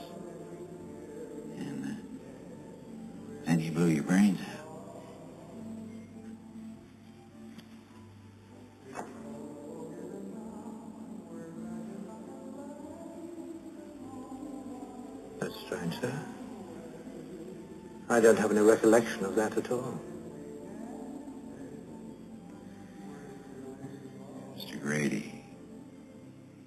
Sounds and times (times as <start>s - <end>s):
Music: 0.0s - 26.6s.